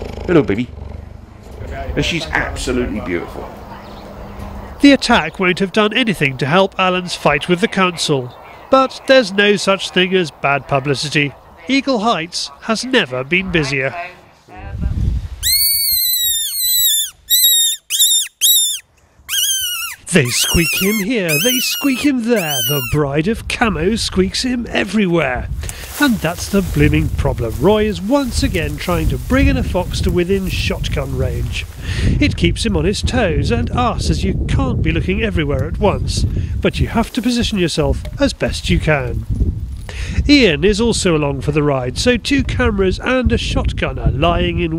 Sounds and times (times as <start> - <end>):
Outside, rural or natural: 0.0 - 44.7
Speech: 1.6 - 4.0, 4.8 - 14.9, 20.1 - 39.2, 40.3 - 44.7.